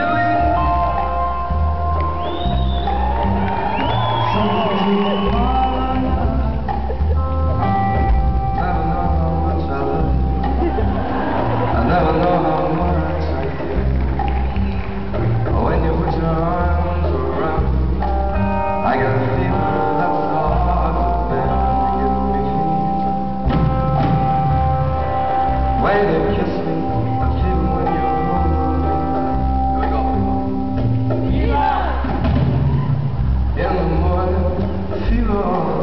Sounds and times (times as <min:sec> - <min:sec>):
Music: 0:00.0 - 0:35.8
Male singing: 0:04.3 - 0:06.9, 0:08.5 - 0:10.2, 0:11.7 - 0:13.6, 0:15.4 - 0:17.9, 0:18.8 - 0:23.2, 0:25.8 - 0:29.5, 0:33.6 - 0:35.8.